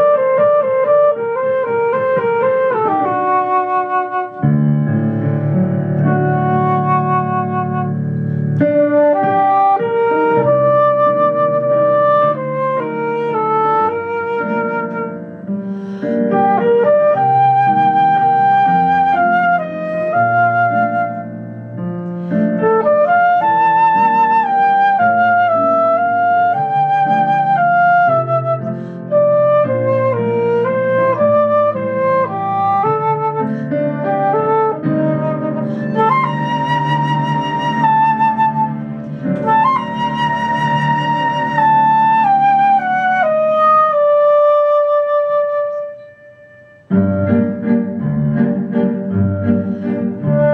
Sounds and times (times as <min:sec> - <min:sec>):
Flute: 0:00.0 - 0:50.5.